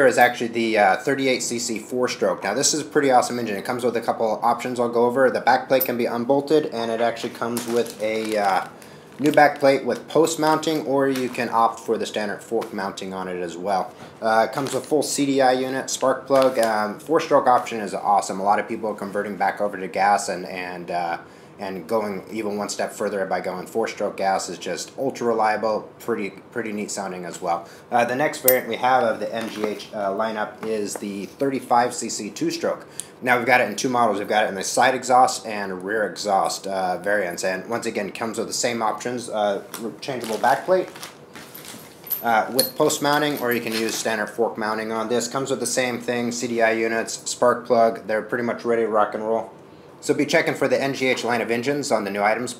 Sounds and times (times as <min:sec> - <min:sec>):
Speech: 0:00.0 - 0:41.0, 0:42.2 - 0:52.6.